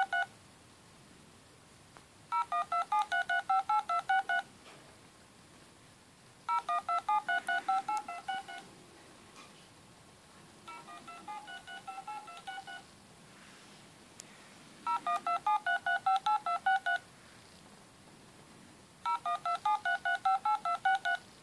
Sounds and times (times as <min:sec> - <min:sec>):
Telephone dialing, DTMF: 0:00.0 - 0:00.3, 0:02.3 - 0:04.5, 0:06.5 - 0:08.7, 0:10.7 - 0:12.8, 0:14.9 - 0:17.0, 0:19.1 - 0:21.2.